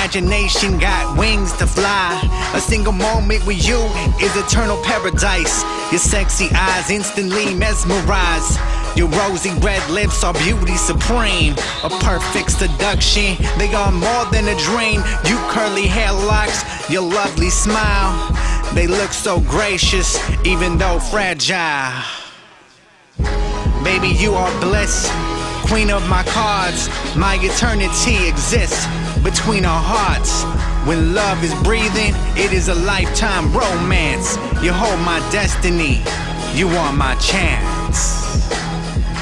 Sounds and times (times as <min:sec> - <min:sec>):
Music: 0:00.0 - 0:21.4, 0:23.0 - 0:39.2
Rapping: 0:00.0 - 0:22.2, 0:23.2 - 0:38.6.